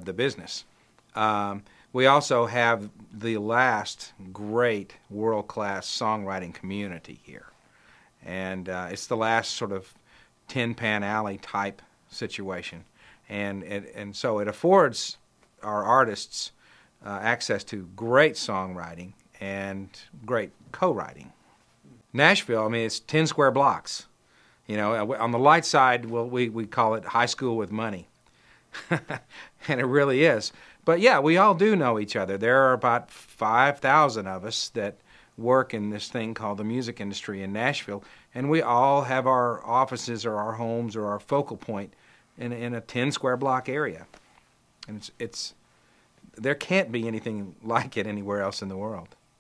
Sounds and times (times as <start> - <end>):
Speech: 0.0 - 7.6, 8.2 - 24.1, 24.7 - 28.1, 29.6 - 44.2, 44.8 - 45.6, 46.3 - 49.2.